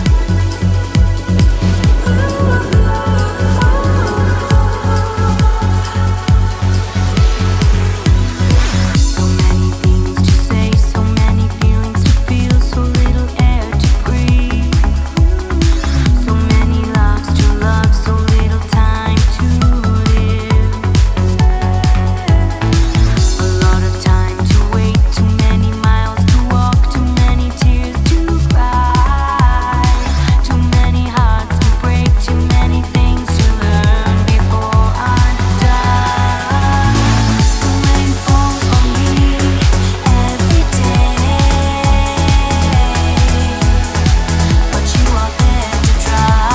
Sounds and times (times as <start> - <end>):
Music: 0.0 - 46.5.